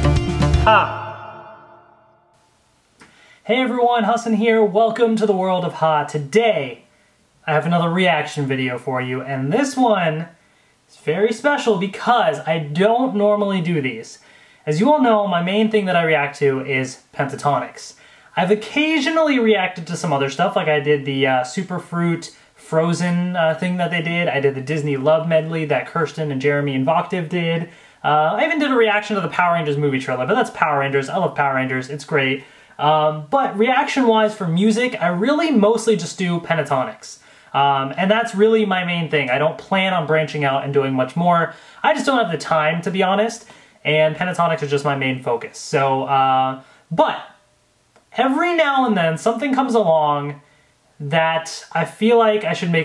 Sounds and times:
Speech: 0:00.7 - 0:01.6, 0:03.4 - 0:47.4, 0:48.1 - 0:52.8.

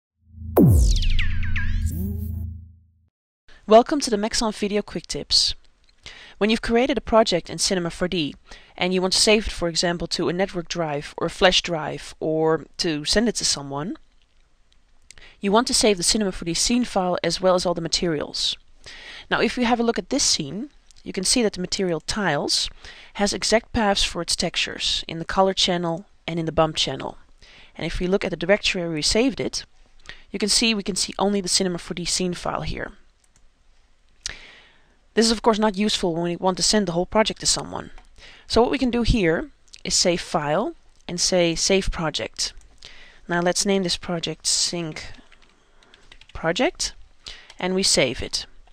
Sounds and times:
Speech: 0:03.7 - 0:05.6, 0:06.4 - 0:14.0, 0:15.4 - 0:18.6, 0:19.3 - 0:27.2, 0:27.8 - 0:29.7, 0:30.3 - 0:33.0, 0:35.2 - 0:42.6, 0:43.3 - 0:45.2, 0:46.4 - 0:47.0, 0:47.6 - 0:48.6.

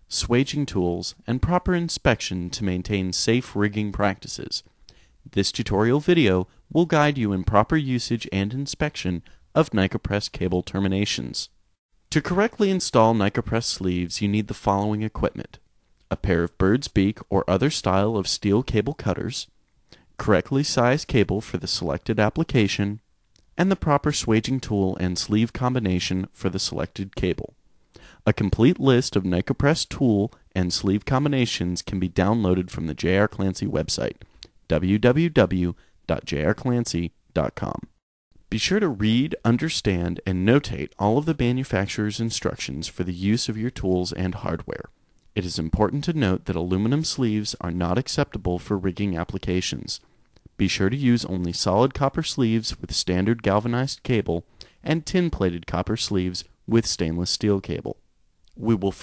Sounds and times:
Speech: 0:00.0 - 0:04.7, 0:05.3 - 0:19.5, 0:20.2 - 0:23.0, 0:23.6 - 0:27.6, 0:28.2 - 0:50.0, 0:50.6 - 0:59.0.

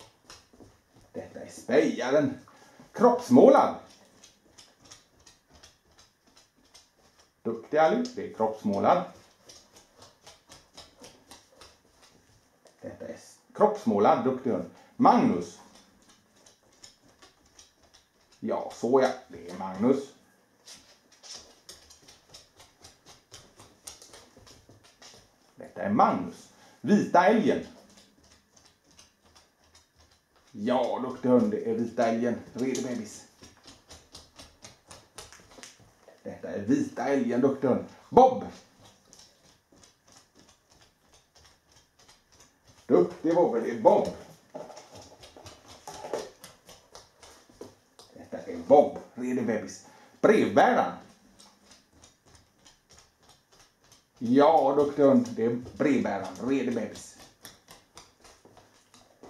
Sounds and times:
Speech: 0:01.1 - 0:04.0, 0:07.5 - 0:09.2, 0:12.8 - 0:15.7, 0:18.4 - 0:20.2, 0:25.6 - 0:27.8, 0:30.5 - 0:33.3, 0:36.1 - 0:38.6, 0:42.9 - 0:44.3, 0:48.1 - 0:51.1, 0:54.2 - 0:57.2.

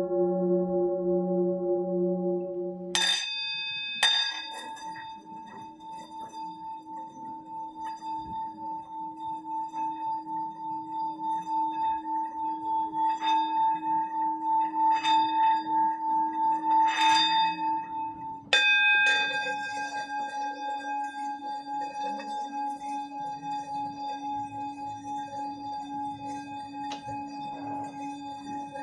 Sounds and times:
Singing bowl: 0:00.0 - 0:28.8.

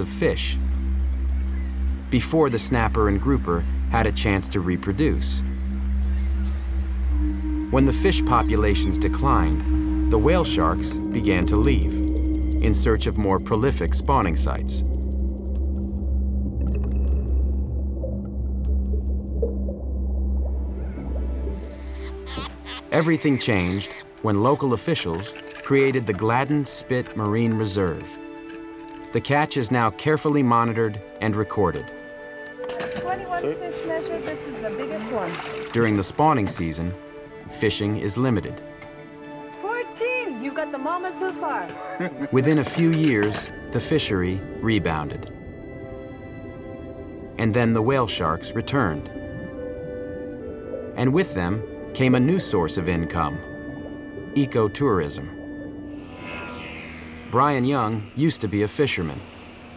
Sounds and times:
Speech: 0:02.1 - 0:05.4, 0:07.8 - 0:11.9, 0:12.6 - 0:14.8, 0:22.9 - 0:28.1, 0:33.0 - 0:37.0, 0:37.6 - 0:38.6, 0:42.3 - 0:45.2, 0:47.4 - 0:49.1, 0:51.0 - 0:53.4, 0:54.4 - 0:55.3, 0:57.4 - 0:59.2.

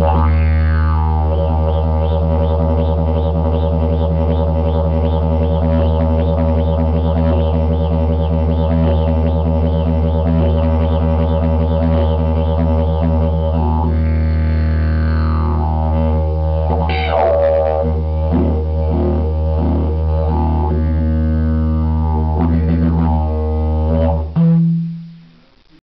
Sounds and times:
Music: 0:00.0 - 0:25.8.

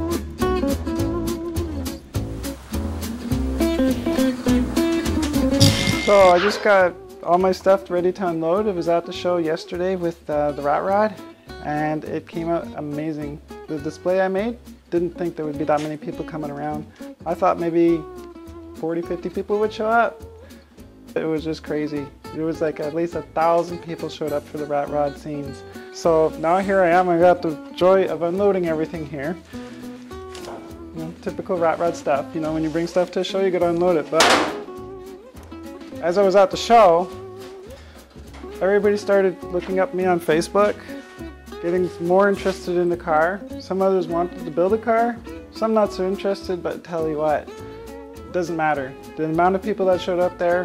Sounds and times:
Music: 0:00.0 - 0:50.6
Speech: 0:05.8 - 0:18.1, 0:18.8 - 0:20.2, 0:21.2 - 0:29.4, 0:30.9 - 0:34.5, 0:36.0 - 0:37.1, 0:38.6 - 0:40.8, 0:41.6 - 0:47.5, 0:48.3 - 0:50.6.

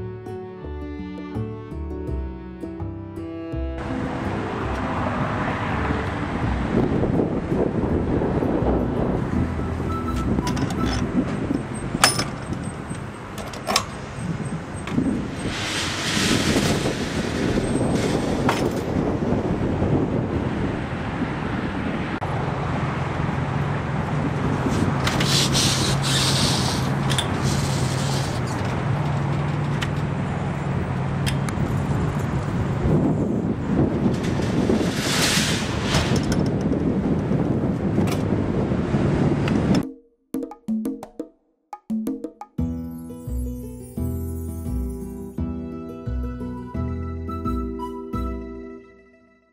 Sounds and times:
Wood block: 0:39.8 - 0:42.7.

